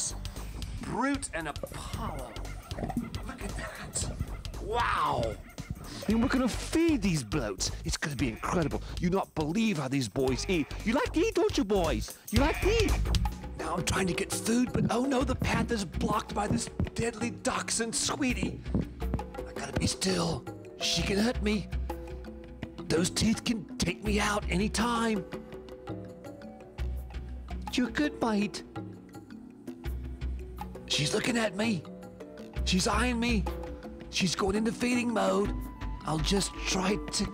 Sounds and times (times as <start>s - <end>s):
Music: 0.0s - 37.3s
Speech: 0.8s - 2.4s, 6.0s - 13.0s, 13.6s - 18.6s, 19.5s - 21.6s, 22.9s - 25.2s, 27.7s - 28.6s, 30.9s - 31.8s, 32.6s - 33.5s, 34.1s - 37.3s.